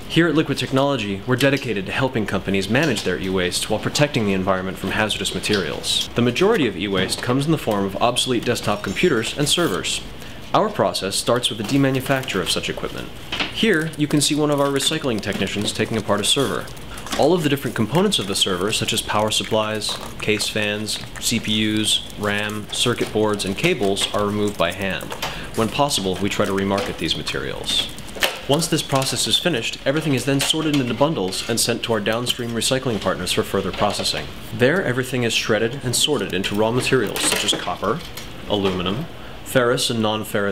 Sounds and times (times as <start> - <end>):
Speech: 0.1 - 40.5.